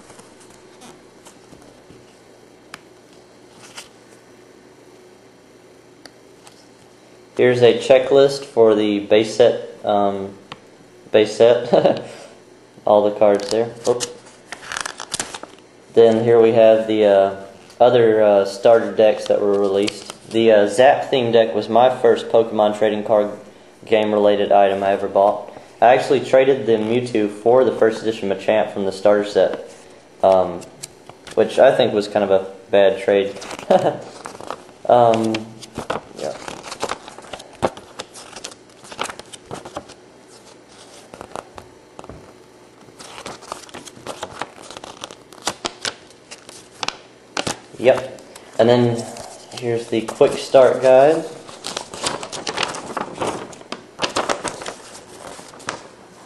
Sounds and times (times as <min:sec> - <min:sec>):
Inside, small room: 0:00.0 - 0:56.2
Speech: 0:07.4 - 0:10.4, 0:11.1 - 0:12.1, 0:12.8 - 0:14.2, 0:15.9 - 0:30.7, 0:31.4 - 0:34.0, 0:34.9 - 0:35.6, 0:36.2 - 0:36.4, 0:47.8 - 0:51.4.